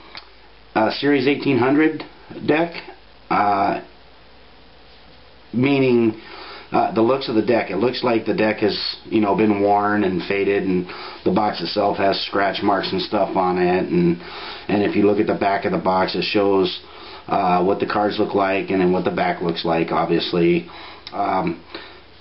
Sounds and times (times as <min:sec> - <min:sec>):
Speech: 0:00.8 - 0:04.0, 0:05.5 - 0:21.6.